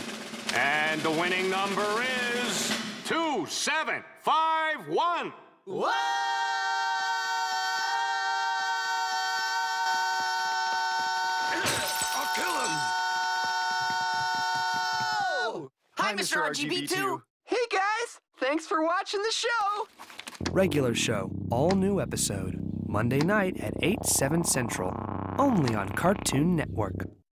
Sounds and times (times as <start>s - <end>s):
Speech: 0.5s - 5.4s, 15.4s - 19.9s, 20.5s - 27.2s.